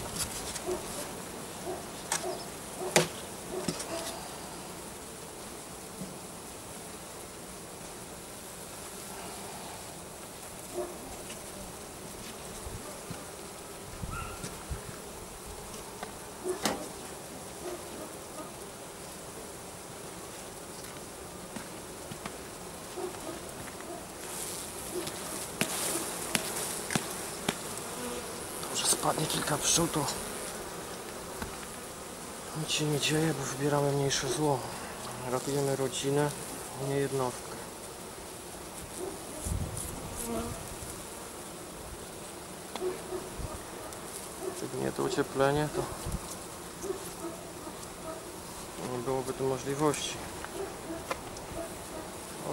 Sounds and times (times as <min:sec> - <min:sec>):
Bee, wasp, etc.: 0:00.0 - 0:52.5.